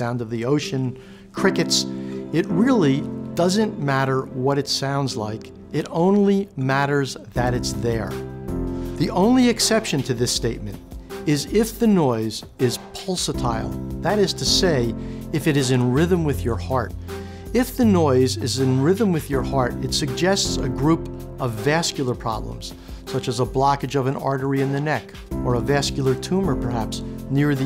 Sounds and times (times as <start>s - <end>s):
Speech: 0.0s - 8.2s, 9.0s - 16.9s, 17.5s - 27.6s
Music: 0.0s - 27.6s.